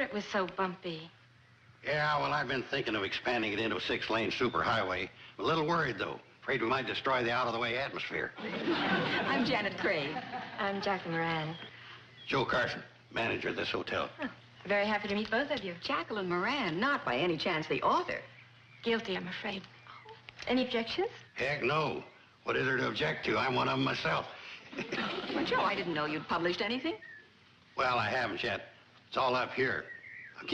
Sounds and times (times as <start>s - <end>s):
Television: 0.0s - 30.5s
Speech: 1.9s - 8.4s, 9.0s - 11.7s, 12.3s - 18.3s, 18.9s - 24.4s, 27.8s - 30.5s.